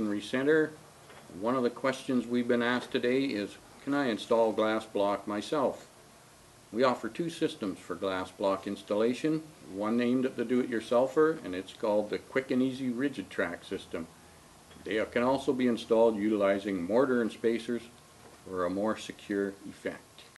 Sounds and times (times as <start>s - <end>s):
Speech: 0.0s - 5.9s, 6.7s - 14.1s, 14.8s - 20.3s.